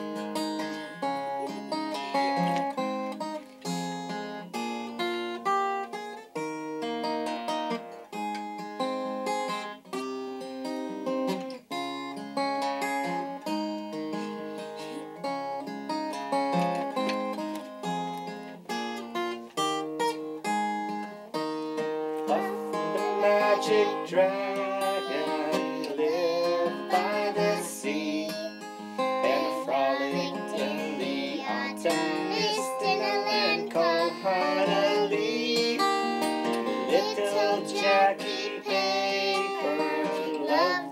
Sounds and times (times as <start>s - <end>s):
Music: 0.0s - 40.9s.